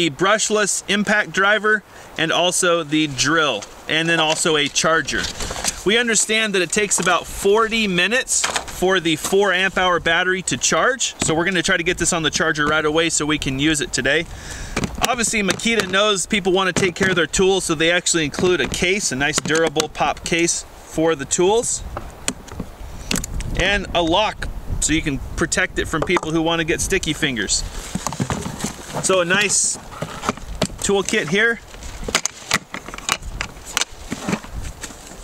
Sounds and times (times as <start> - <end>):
Speech: 0.0 - 14.3, 15.0 - 21.8, 23.6 - 27.7, 29.0 - 29.8, 30.8 - 31.6.